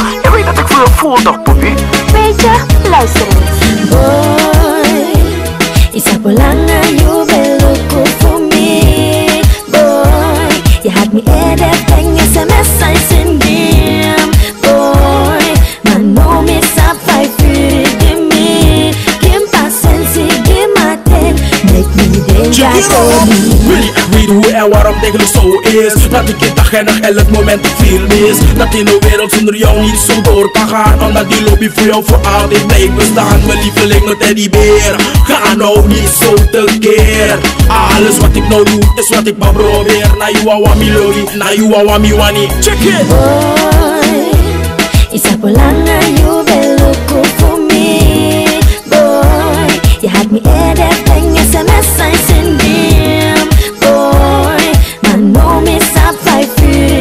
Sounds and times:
Music: 0:00.0 - 0:57.0.

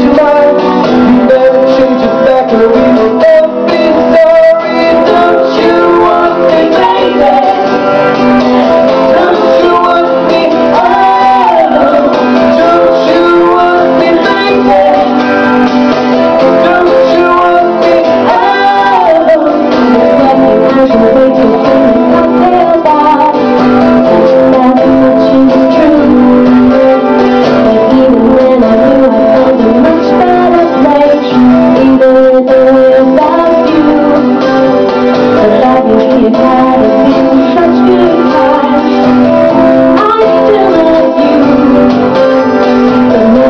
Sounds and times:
Male singing: 0:00.0 - 0:07.6, 0:09.1 - 0:15.2, 0:16.6 - 0:23.4, 0:27.7 - 0:34.2, 0:35.4 - 0:38.9, 0:40.0 - 0:41.8, 0:43.1 - 0:43.4
Female singing: 0:00.0 - 0:07.7, 0:09.0 - 0:15.2, 0:16.5 - 0:23.5, 0:24.1 - 0:34.4, 0:35.3 - 0:39.0, 0:39.6 - 0:41.9, 0:43.0 - 0:43.4
Music: 0:00.0 - 0:43.4.

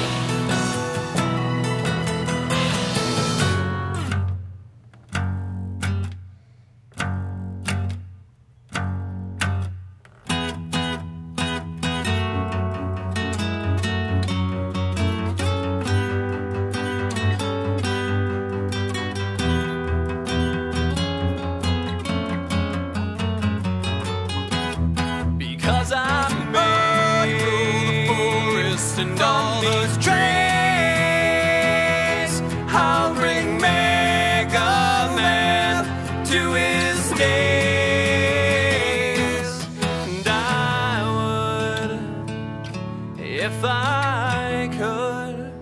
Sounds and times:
Acoustic guitar: 0:00.0 - 0:45.6.

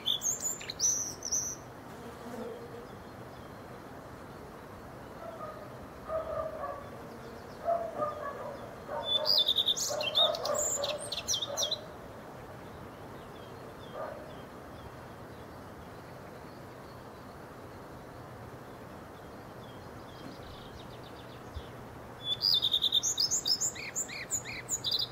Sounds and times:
Chirp, tweet: 0:00.0 - 0:01.6, 0:05.0 - 0:11.9, 0:12.6 - 0:17.9, 0:18.6 - 0:25.1.

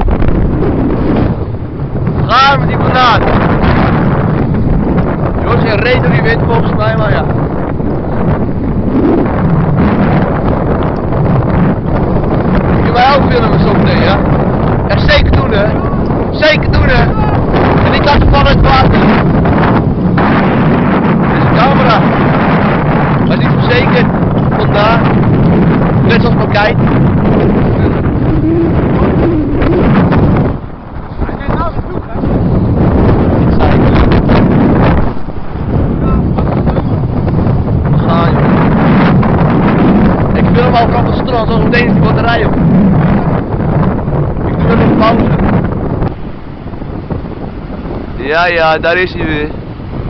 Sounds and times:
Speech: 0:02.2 - 0:03.2, 0:05.4 - 0:07.3, 0:12.8 - 0:14.2, 0:14.9 - 0:19.0, 0:21.3 - 0:22.0, 0:23.3 - 0:25.0, 0:26.1 - 0:26.8, 0:31.2 - 0:32.3, 0:38.0 - 0:38.4, 0:40.4 - 0:42.6, 0:44.5 - 0:45.3, 0:48.2 - 0:49.6.

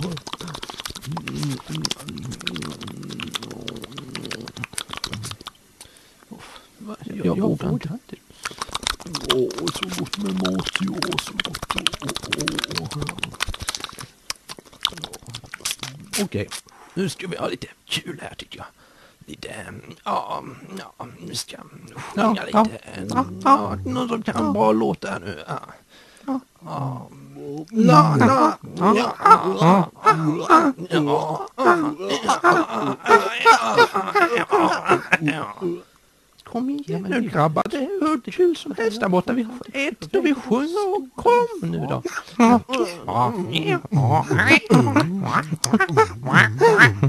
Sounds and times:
Speech: 0:00.0 - 0:05.3, 0:06.3 - 0:08.3, 0:09.1 - 0:13.4, 0:14.9 - 0:47.0
Chewing, mastication: 0:00.0 - 0:05.6, 0:08.4 - 0:16.7.

